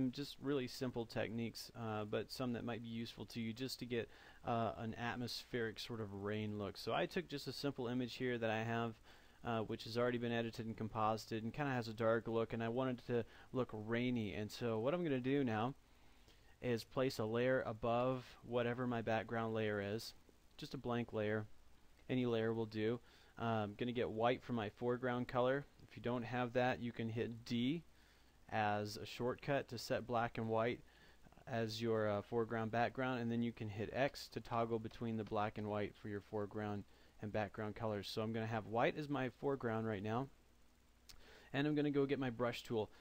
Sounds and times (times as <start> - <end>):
Speech: 0.0 - 15.8, 16.6 - 27.9, 28.5 - 40.4, 41.5 - 43.0.